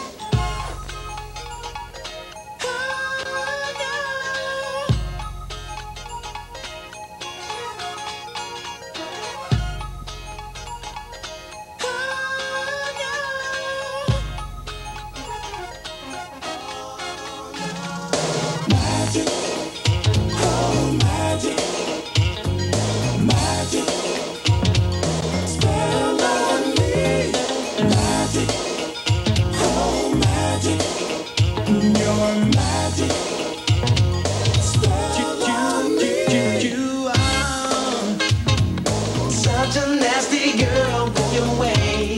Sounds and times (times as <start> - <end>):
Music: 0.0 - 42.1.